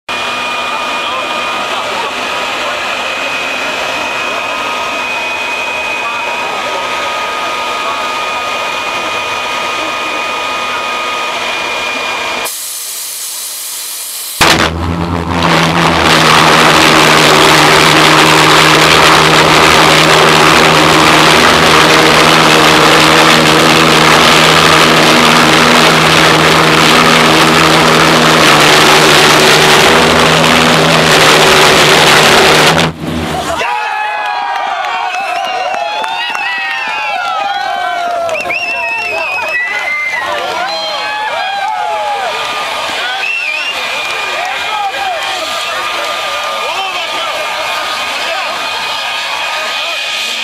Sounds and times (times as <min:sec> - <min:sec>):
Vehicle: 0:00.1 - 0:50.4.